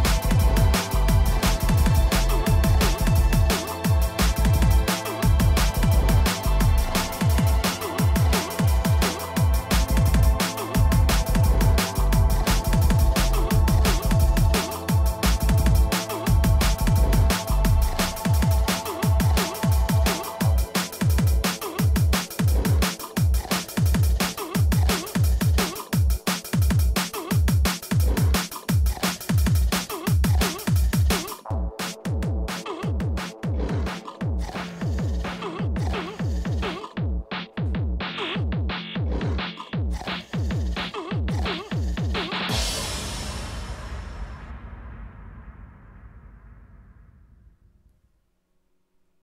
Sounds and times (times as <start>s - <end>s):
Drum and bass: 0.0s - 46.5s.